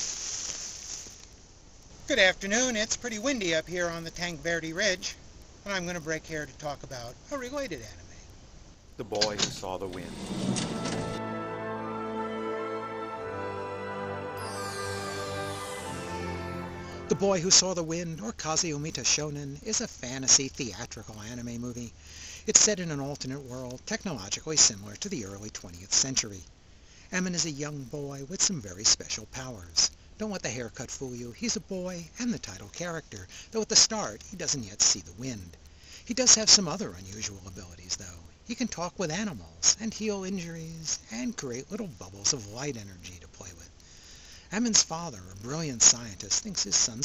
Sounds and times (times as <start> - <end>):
Speech: 2.1 - 8.3, 9.0 - 10.2, 17.1 - 26.5, 27.1 - 43.8, 44.5 - 47.0.